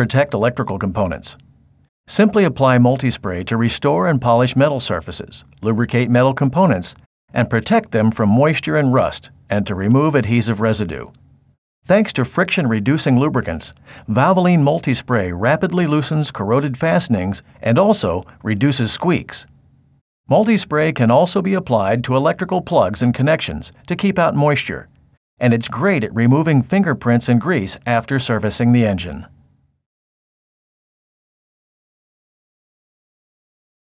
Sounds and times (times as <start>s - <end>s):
Speech: 0.0s - 1.4s, 2.1s - 11.2s, 11.8s - 19.5s, 20.3s - 29.4s.